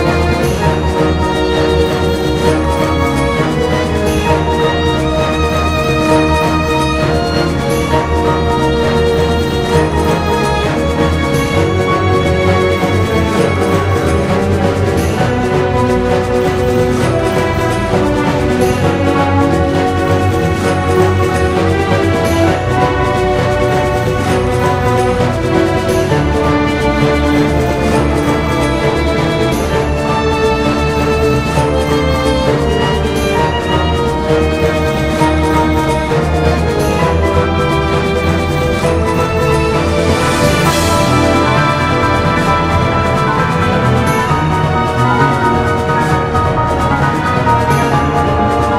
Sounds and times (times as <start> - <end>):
Exciting music: 0.0 - 48.7.